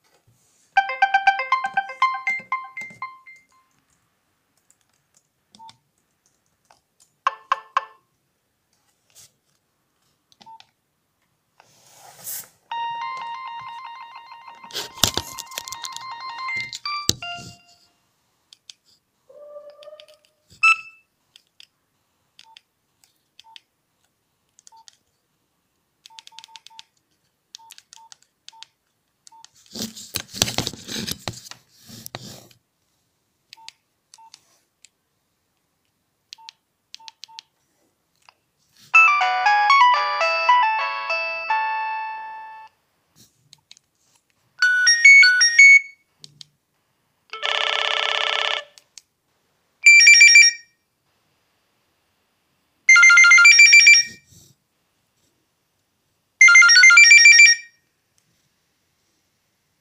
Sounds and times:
Ringtone: 0.8s - 3.6s, 12.7s - 17.9s, 20.6s - 21.0s, 39.0s - 42.7s, 44.6s - 46.0s, 49.9s - 50.6s, 52.9s - 54.2s, 56.4s - 57.7s
Beep, bleep: 20.6s - 21.0s.

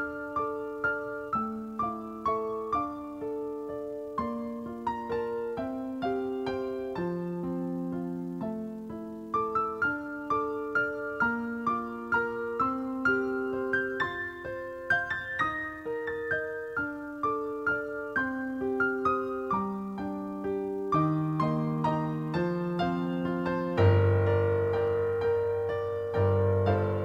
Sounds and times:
Electric piano: 0.0s - 27.0s.

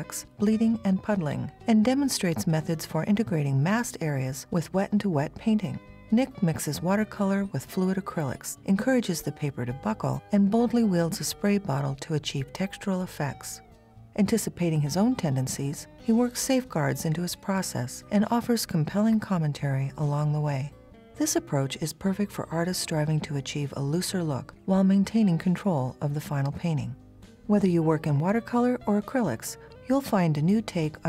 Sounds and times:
Speech: 0.0s - 13.6s, 14.2s - 31.0s
Music: 0.0s - 31.0s.

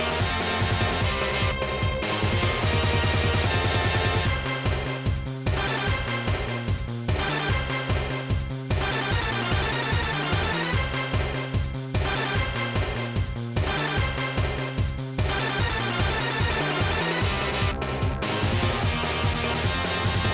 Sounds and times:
Video game music: 0.0s - 20.3s.

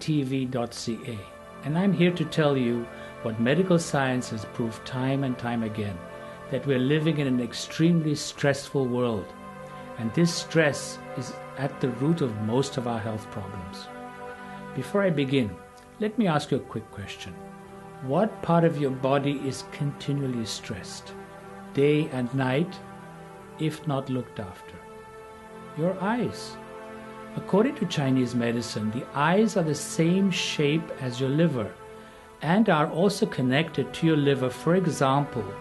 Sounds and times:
Speech: 0.0s - 9.3s, 10.0s - 13.9s, 14.8s - 17.4s, 18.0s - 21.1s, 21.8s - 22.8s, 23.6s - 24.8s, 25.8s - 26.6s, 27.4s - 31.8s, 32.4s - 35.6s
Music: 0.0s - 35.6s.

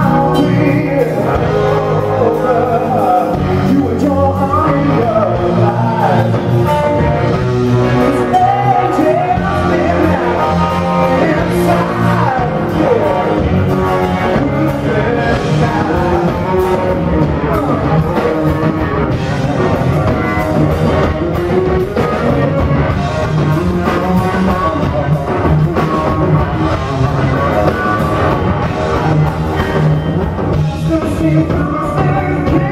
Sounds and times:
Guitar: 0.0s - 32.7s
Inside, public space: 0.0s - 32.7s.

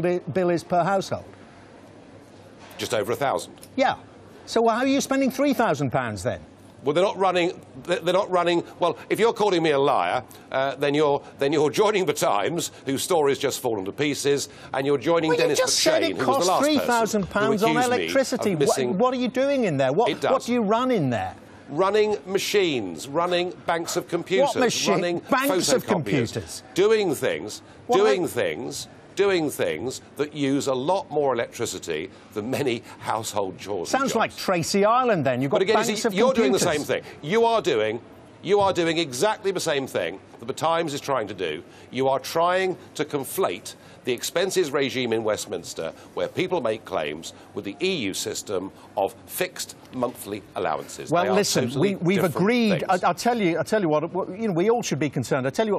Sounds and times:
Speech: 2.8s - 55.7s.

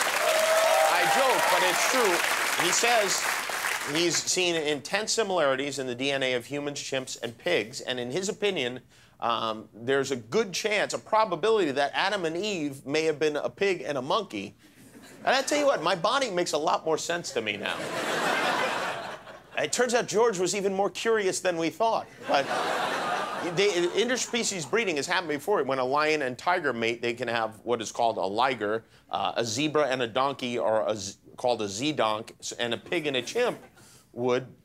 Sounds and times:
Speech: 0.9s - 3.2s, 3.9s - 14.6s, 15.2s - 17.8s, 19.6s - 22.5s, 23.4s - 34.6s.

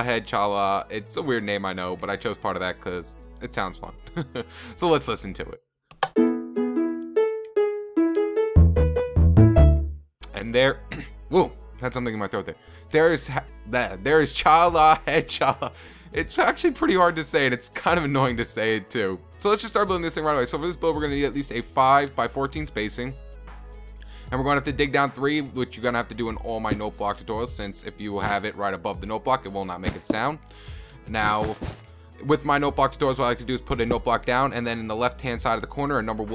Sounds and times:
Speech: 0.0s - 4.0s, 4.7s - 5.6s, 10.2s - 23.2s, 24.3s - 30.4s, 31.1s - 36.3s
Music: 0.0s - 36.3s.

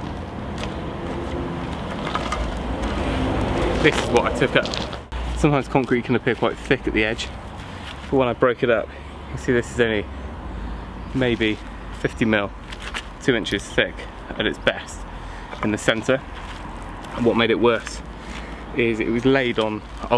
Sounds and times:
Speech: 3.8s - 4.8s, 5.4s - 7.4s, 8.1s - 10.1s, 11.2s - 12.5s, 13.2s - 15.0s, 15.6s - 16.2s, 17.2s - 18.0s, 18.8s - 20.1s.

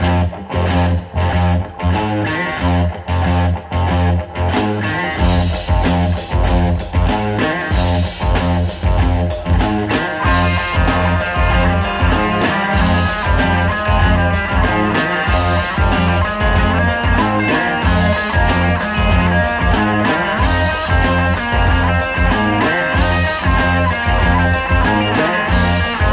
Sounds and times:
Ska: 0.0s - 26.1s.

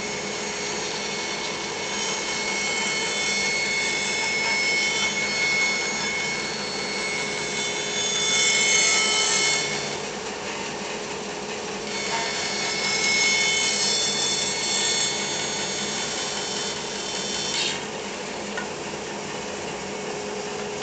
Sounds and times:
Sawing: 0.0s - 20.8s.

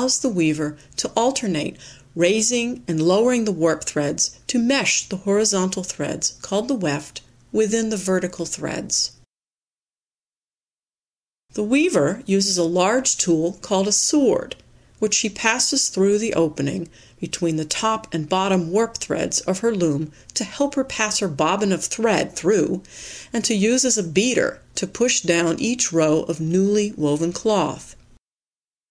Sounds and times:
Narration, monologue: 0.0s - 9.3s, 11.5s - 28.2s.

